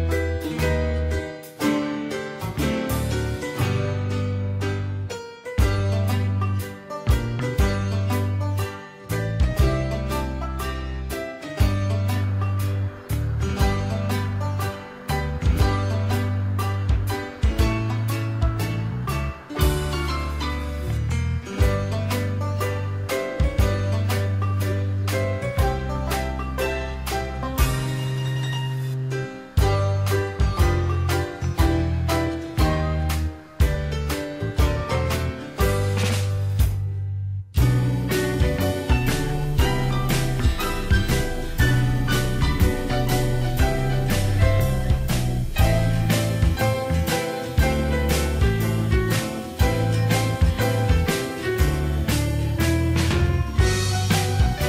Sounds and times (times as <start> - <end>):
Music: 0.0 - 54.6.